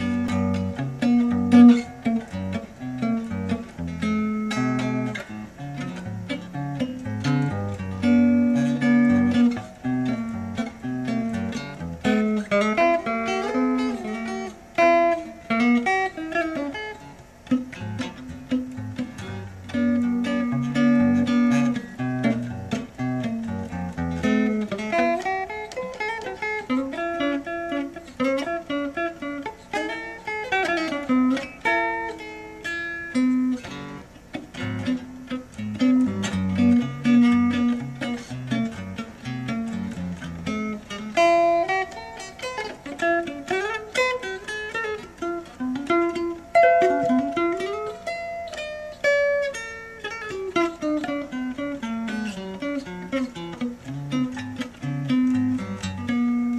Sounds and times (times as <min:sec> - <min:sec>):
Strum: 0:33.4 - 0:48.8.